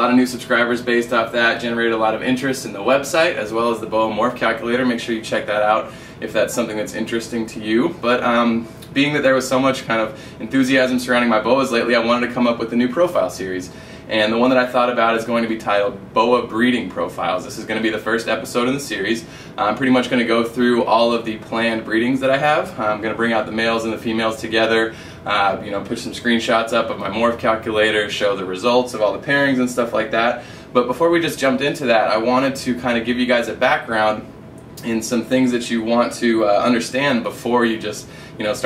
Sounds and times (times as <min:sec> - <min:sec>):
Inside, small room: 0:00.0 - 0:38.6
Speech: 0:00.0 - 0:38.6.